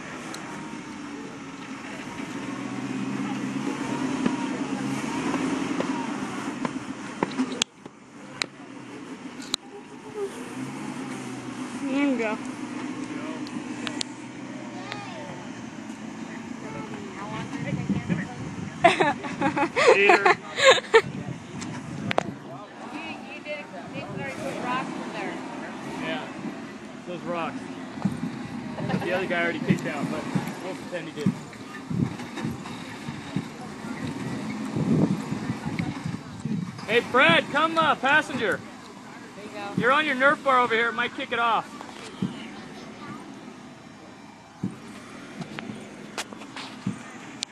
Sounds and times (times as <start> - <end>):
Outside, rural or natural: 0.0 - 47.5
Vehicle: 0.0 - 47.5.